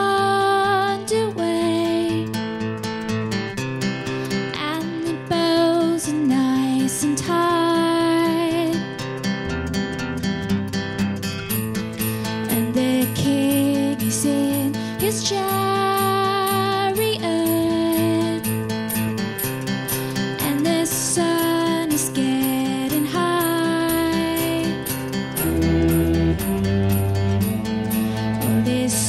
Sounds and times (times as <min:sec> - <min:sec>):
Music: 0:00.0 - 0:29.0.